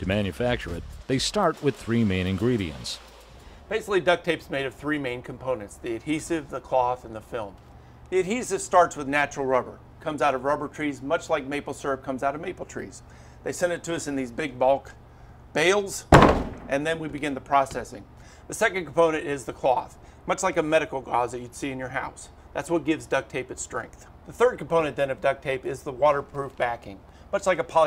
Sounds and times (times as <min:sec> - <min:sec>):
Speech: 0:00.0 - 0:03.0, 0:03.7 - 0:15.0, 0:15.6 - 0:16.1, 0:16.7 - 0:27.8.